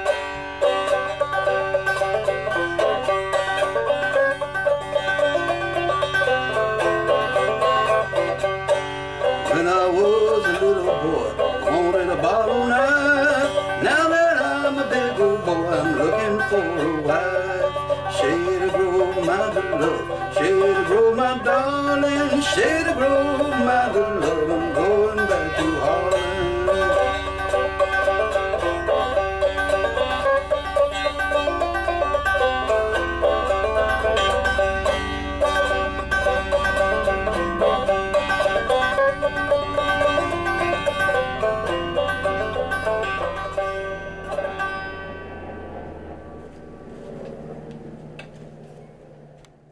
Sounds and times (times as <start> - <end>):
Banjo: 0.0 - 45.7.